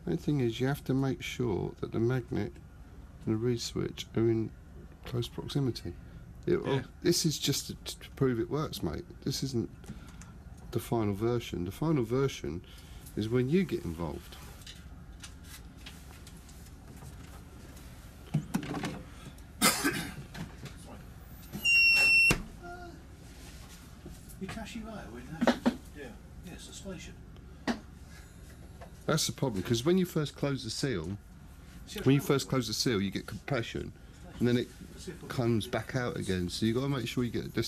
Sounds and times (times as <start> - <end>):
Speech: 0.0 - 2.6, 3.2 - 9.7, 10.7 - 12.6, 13.2 - 14.4, 24.4 - 27.2, 29.1 - 31.2, 31.9 - 37.6.